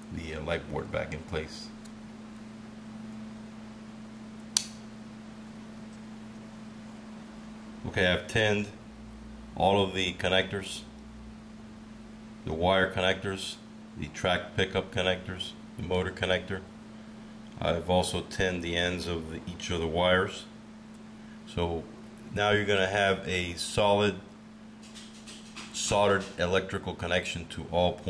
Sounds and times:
Speech: 0:00.1 - 0:01.8, 0:07.8 - 0:08.8, 0:09.6 - 0:11.0, 0:12.4 - 0:16.7, 0:17.6 - 0:20.6, 0:21.5 - 0:24.3, 0:25.7 - 0:28.1.

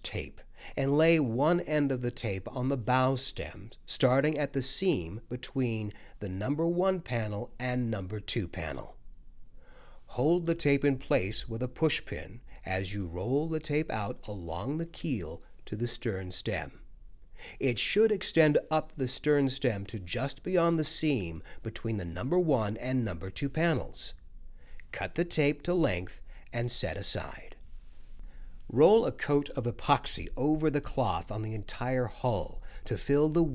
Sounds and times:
Speech: 0:00.0 - 0:09.0, 0:10.1 - 0:16.8, 0:17.6 - 0:24.2, 0:24.9 - 0:27.6, 0:28.7 - 0:33.5.

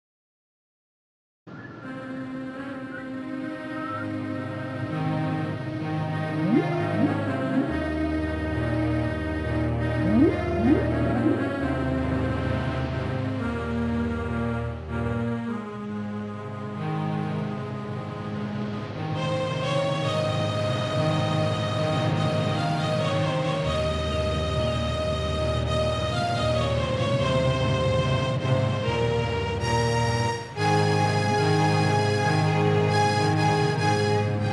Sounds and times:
Music: 0:01.5 - 0:34.5.

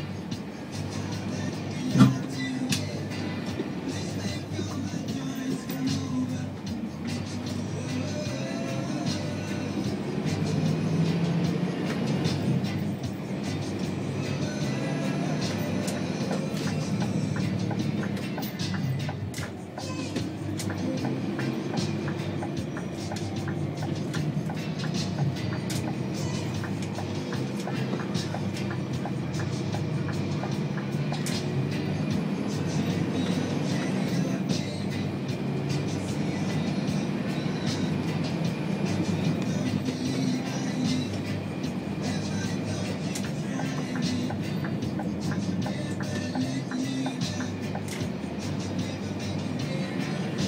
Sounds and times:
Music: 0:00.0 - 0:50.4
Vehicle: 0:00.0 - 0:50.4.

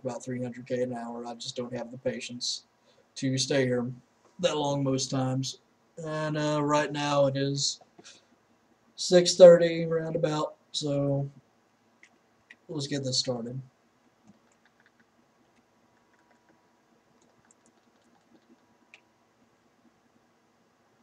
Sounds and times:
Speech: 0:00.0 - 0:07.8, 0:09.0 - 0:11.4, 0:12.7 - 0:13.7.

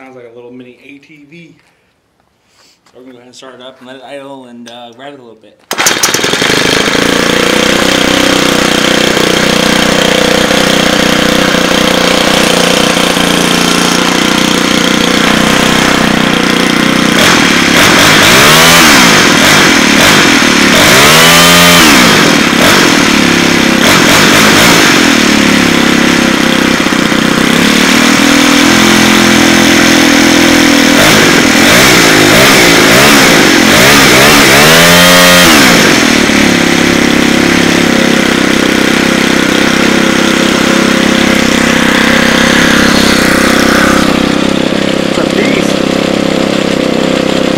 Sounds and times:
Accelerating, revving, vroom: 0:17.2 - 0:23.1, 0:23.8 - 0:25.3, 0:27.6 - 0:36.2.

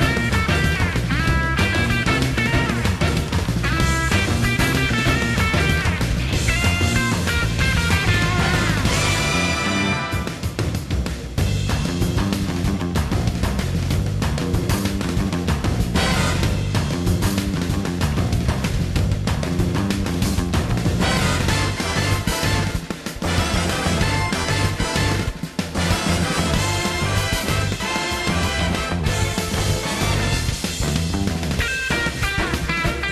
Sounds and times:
Jingle (music): 0:00.0 - 0:11.9, 0:16.0 - 0:16.9, 0:21.0 - 0:33.1
Video game music: 0:00.0 - 0:33.1.

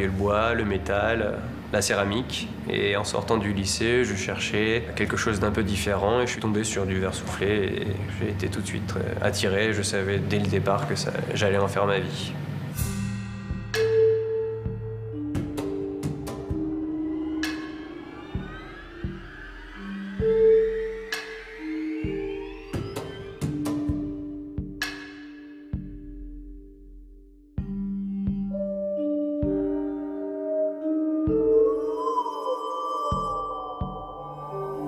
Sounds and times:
Music: 0:00.0 - 0:34.8.

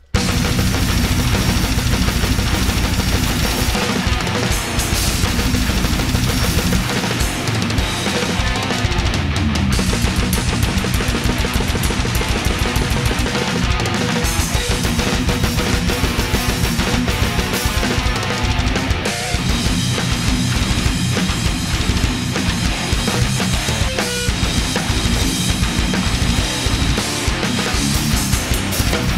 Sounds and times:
Drum: 0:00.0 - 0:29.1
Drum kit: 0:00.0 - 0:29.1.

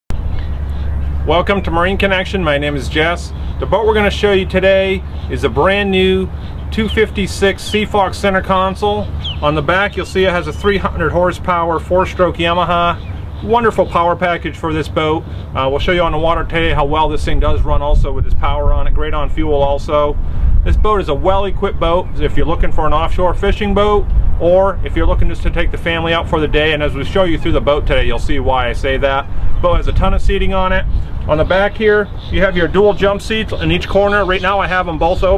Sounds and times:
Boat, Water vehicle: 0:00.1 - 0:35.3
Speech: 0:01.3 - 0:35.3.

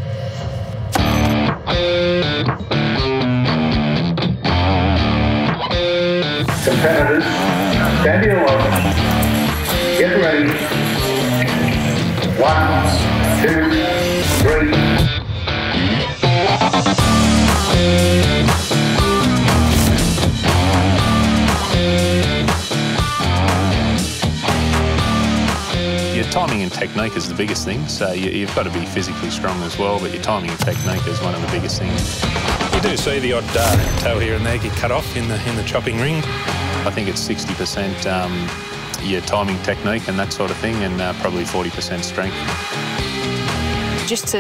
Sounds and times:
Music: 0:00.0 - 0:44.4
Speech: 0:06.6 - 0:09.0, 0:26.2 - 0:32.0, 0:32.8 - 0:42.4, 0:44.1 - 0:44.4.

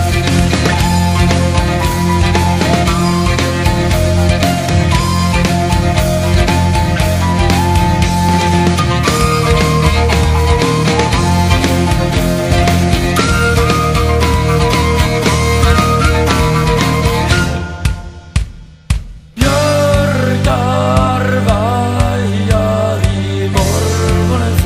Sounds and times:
Rock music: 0:00.0 - 0:24.6.

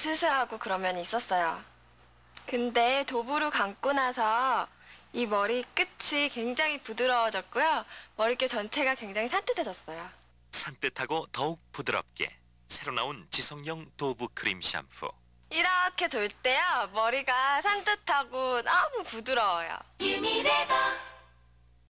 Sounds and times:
Speech: 0:02.4 - 0:19.9
Music: 0:20.0 - 0:21.4.

